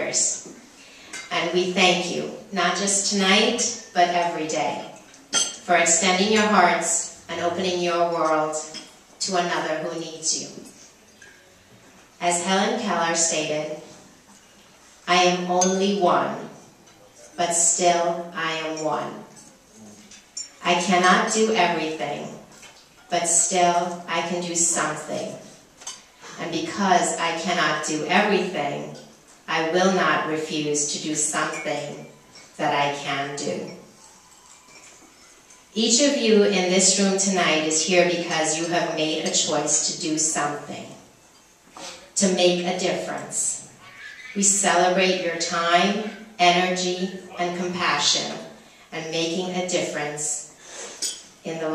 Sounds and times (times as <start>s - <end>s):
Speech: 1.3s - 5.0s, 5.6s - 10.7s, 12.2s - 13.8s, 15.1s - 20.0s, 20.6s - 22.4s, 23.1s - 25.5s, 26.3s - 33.8s, 35.8s - 41.0s, 41.8s - 43.7s, 44.4s - 50.5s, 51.5s - 51.7s.